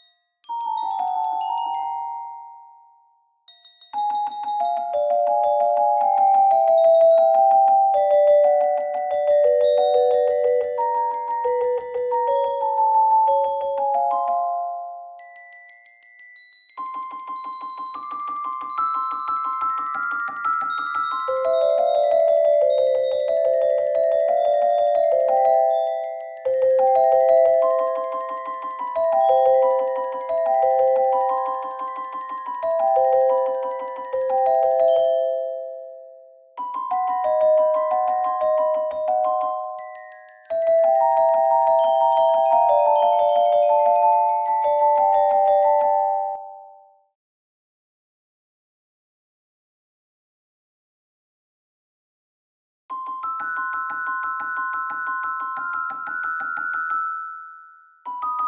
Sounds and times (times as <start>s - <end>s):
Glockenspiel: 0.0s - 47.2s, 52.9s - 58.4s.